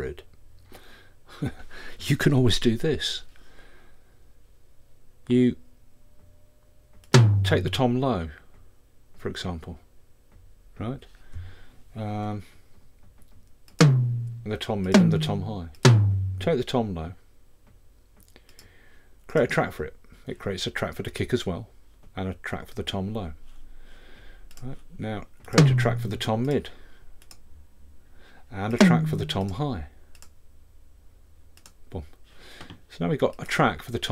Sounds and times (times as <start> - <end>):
Speech: 0.0 - 0.3, 1.4 - 3.3, 5.3 - 5.6, 7.5 - 8.5, 9.2 - 9.9, 10.8 - 11.1, 12.0 - 12.6, 14.4 - 15.8, 16.4 - 17.2, 19.3 - 23.4, 24.6 - 26.8, 28.5 - 30.0, 31.9 - 32.2, 32.9 - 34.1
Bass drum: 7.2 - 7.8, 13.8 - 16.6, 25.6 - 26.2, 28.8 - 29.5
Drum machine: 7.2 - 7.8, 13.8 - 16.6, 25.6 - 26.2, 28.8 - 29.5.